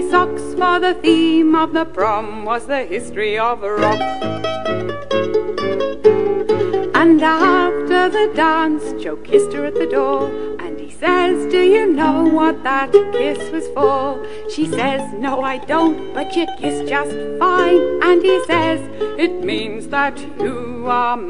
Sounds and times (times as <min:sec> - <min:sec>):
Mandolin: 0:00.0 - 0:21.3
Ukulele: 0:00.0 - 0:21.3.